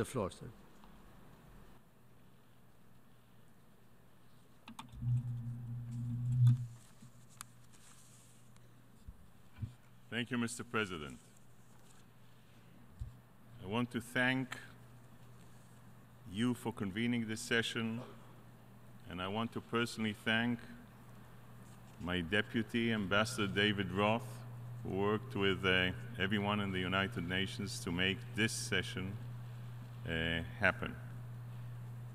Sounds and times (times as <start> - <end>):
Male speech, man speaking: 0.0 - 0.6, 10.1 - 11.2, 13.6 - 14.8, 16.3 - 18.2, 19.0 - 20.8, 22.0 - 29.2, 30.0 - 31.1
Narration, monologue: 0.0 - 1.6, 6.3 - 32.1.